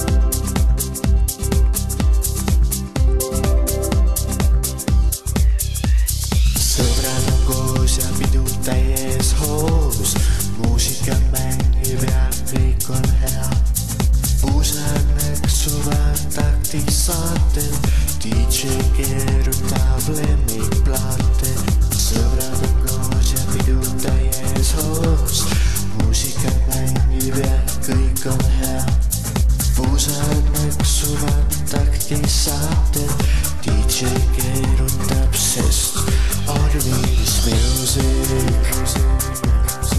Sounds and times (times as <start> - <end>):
Music: 0.0 - 39.9.